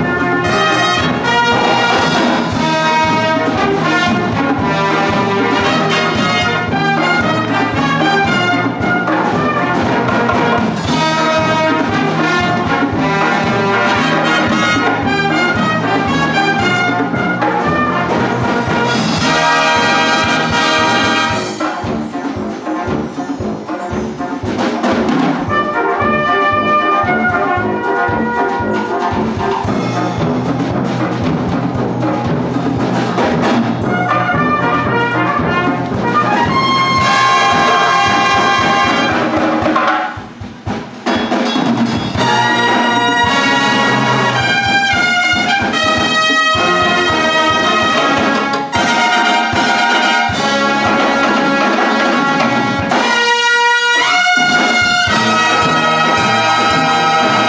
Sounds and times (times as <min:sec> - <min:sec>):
Classical music: 0:00.0 - 0:40.0, 0:42.2 - 0:57.4
Drum kit: 0:00.0 - 0:57.4
Orchestra: 0:00.0 - 0:57.4
Trumpet: 0:00.0 - 0:57.4.